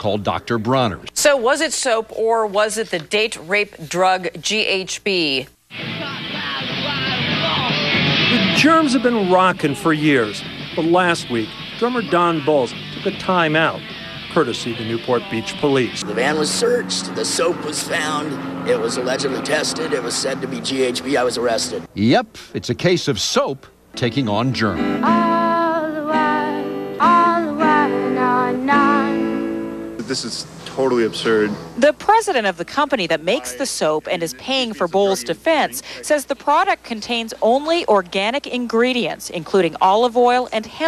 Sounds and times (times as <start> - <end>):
Music: 5.7 - 16.0, 24.0 - 30.4
Speech: 8.5 - 24.8, 30.0 - 40.8.